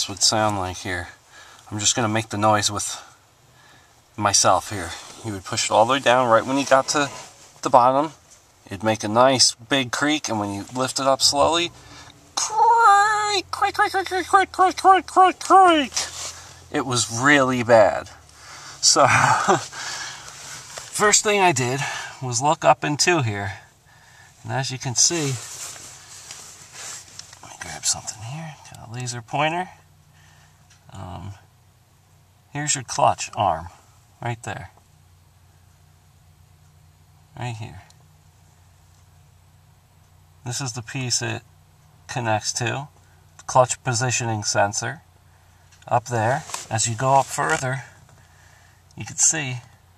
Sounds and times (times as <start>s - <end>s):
Speech: 0.0s - 3.2s, 4.2s - 11.8s, 12.4s - 18.2s, 18.8s - 19.7s, 20.9s - 23.7s, 24.4s - 25.5s, 27.4s - 29.8s, 30.9s - 31.5s, 32.5s - 34.8s, 37.3s - 38.0s, 40.4s - 41.5s, 42.1s - 45.0s, 45.8s - 48.0s, 49.0s - 49.8s.